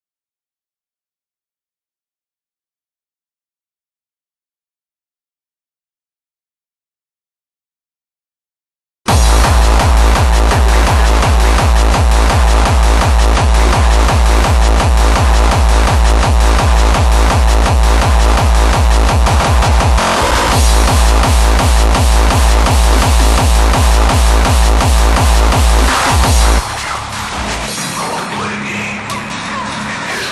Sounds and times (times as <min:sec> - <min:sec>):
Electronic music: 0:09.1 - 0:30.3.